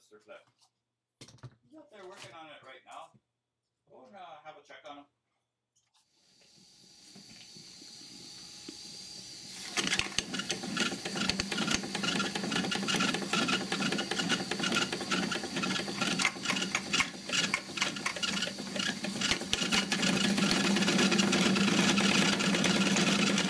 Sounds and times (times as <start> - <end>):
Engine: 7.2 - 23.4.